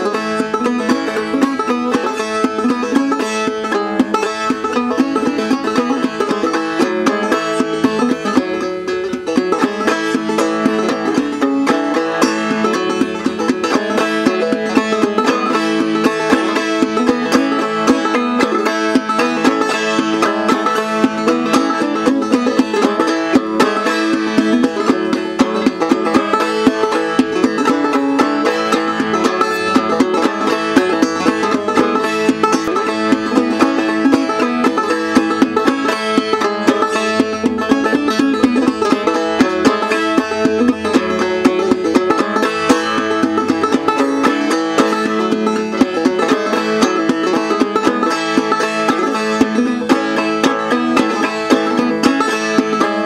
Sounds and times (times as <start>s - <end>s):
Mandolin: 0.0s - 53.0s.